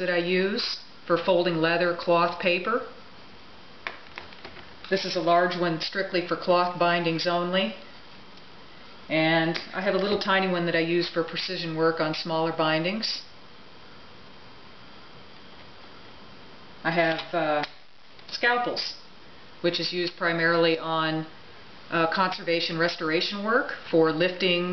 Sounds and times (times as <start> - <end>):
Speech: 0.0 - 3.0, 4.9 - 7.8, 9.1 - 13.4, 16.8 - 24.7.